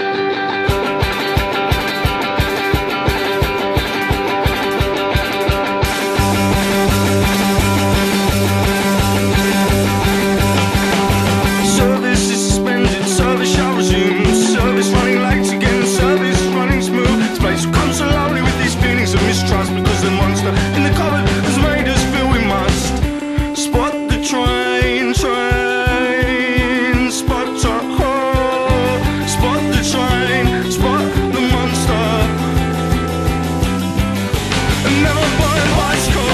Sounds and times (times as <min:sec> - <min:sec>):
Music: 0:00.0 - 0:36.3.